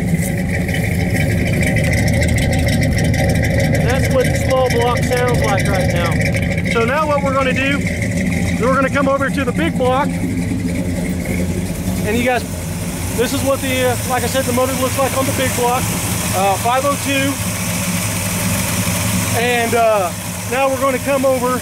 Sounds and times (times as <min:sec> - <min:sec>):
Speech: 0:03.8 - 0:07.8, 0:08.6 - 0:10.1, 0:12.0 - 0:12.5, 0:13.2 - 0:17.4, 0:19.3 - 0:21.6.